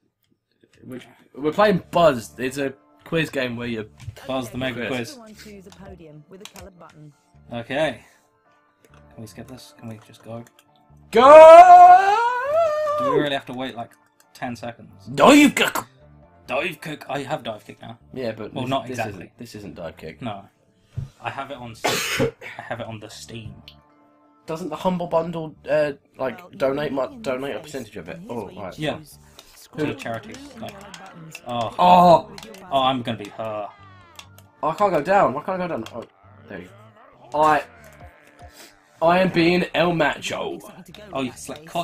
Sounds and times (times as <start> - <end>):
Speech: 0.8 - 8.0, 24.5 - 38.0, 39.0 - 41.8.